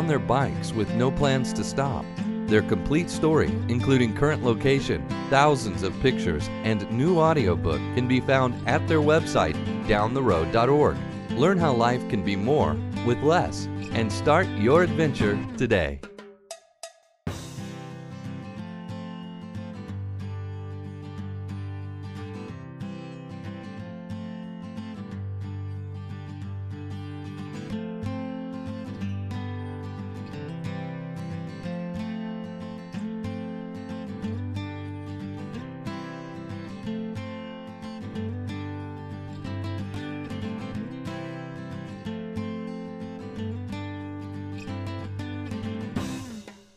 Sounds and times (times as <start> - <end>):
Speech: 0.0 - 16.1
Music: 0.0 - 46.7.